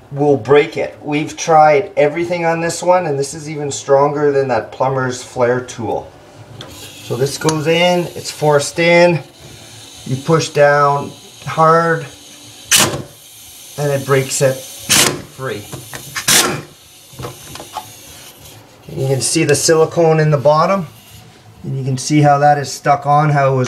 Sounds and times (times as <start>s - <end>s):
Speech: 0.1s - 6.1s, 7.1s - 9.3s, 10.1s - 12.1s, 13.8s - 14.6s, 15.4s - 15.7s, 18.9s - 20.9s, 21.6s - 23.6s.